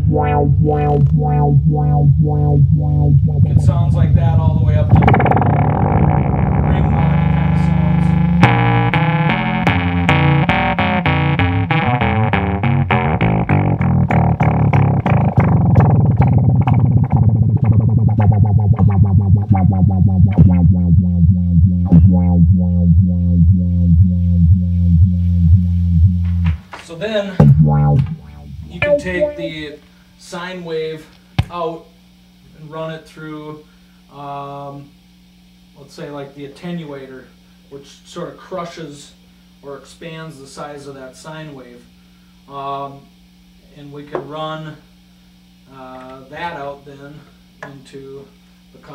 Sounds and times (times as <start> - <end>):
Effects unit: 0.0 - 26.7, 27.4 - 29.8.